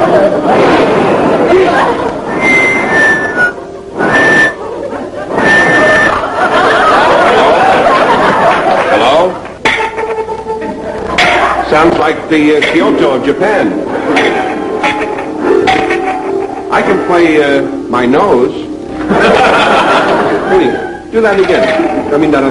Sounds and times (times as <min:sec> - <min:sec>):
Speech: 0:20.5 - 0:22.5.